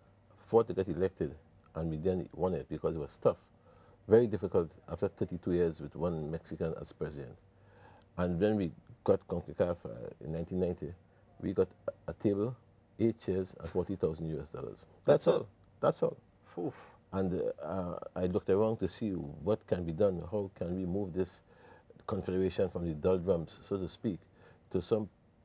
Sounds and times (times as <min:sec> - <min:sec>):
Speech: 0:00.4 - 0:03.5, 0:04.1 - 0:07.4, 0:08.2 - 0:21.4, 0:22.0 - 0:25.1.